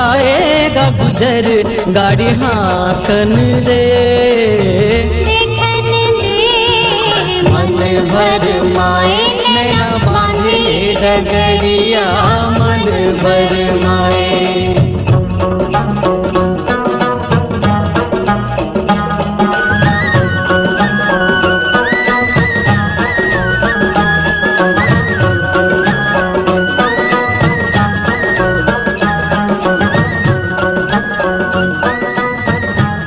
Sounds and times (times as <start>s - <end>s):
Folk music: 0.0s - 33.0s.